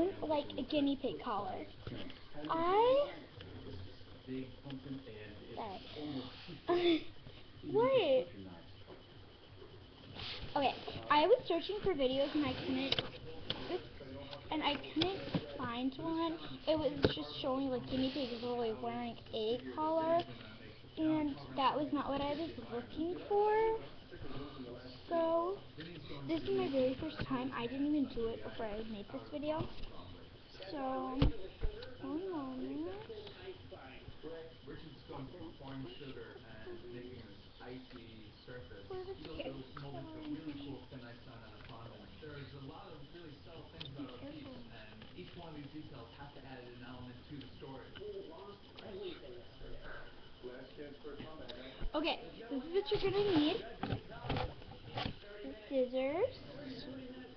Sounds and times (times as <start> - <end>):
Speech: 9.6 - 57.3.